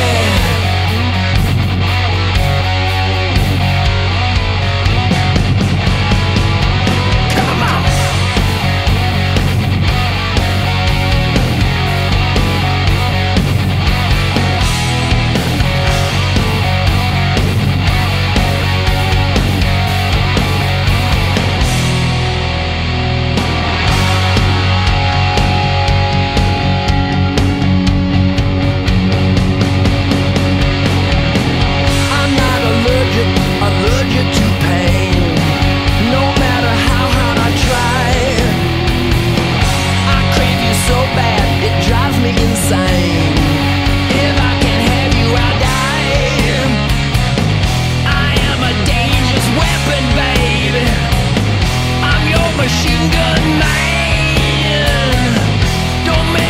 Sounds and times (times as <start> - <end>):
Music: 0.0 - 56.4.